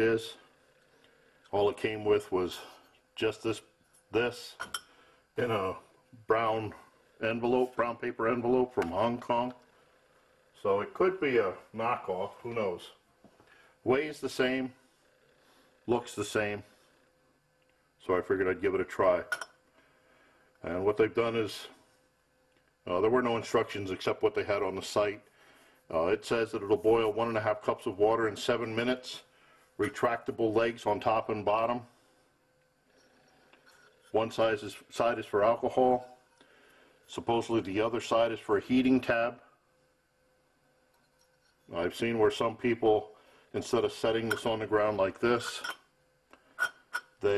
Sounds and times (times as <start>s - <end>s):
Speech: 0.0s - 0.4s, 1.5s - 4.7s, 5.4s - 9.6s, 10.6s - 13.0s, 13.8s - 14.8s, 15.9s - 16.7s, 18.0s - 19.4s, 20.6s - 21.8s, 22.8s - 25.3s, 25.9s - 31.9s, 34.1s - 36.2s, 37.1s - 39.5s, 41.7s - 45.8s.